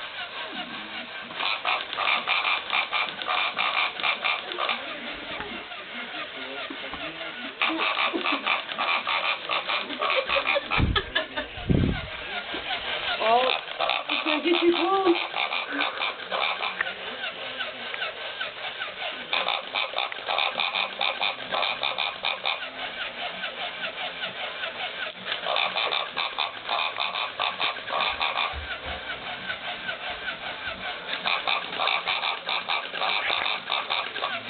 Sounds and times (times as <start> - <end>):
Oink: 1.4 - 5.5, 7.6 - 10.8, 13.2 - 17.0, 18.9 - 24.4, 25.3 - 30.4, 31.1 - 34.4.